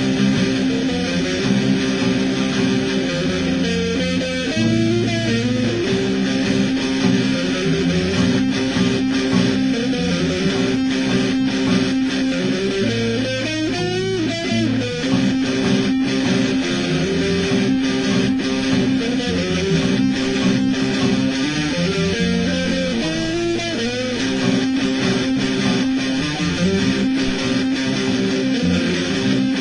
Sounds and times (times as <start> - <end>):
Electric guitar: 0.0 - 29.6
Strum: 0.0 - 29.6.